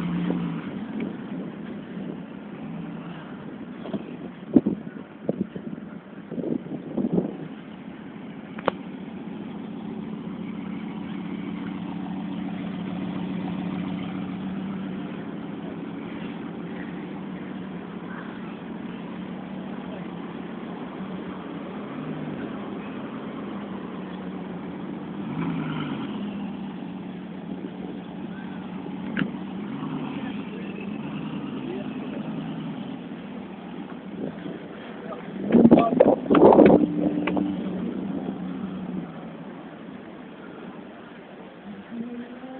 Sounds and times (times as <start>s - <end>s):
Speech: 30.1s - 32.4s, 34.4s - 36.3s, 41.7s - 42.5s.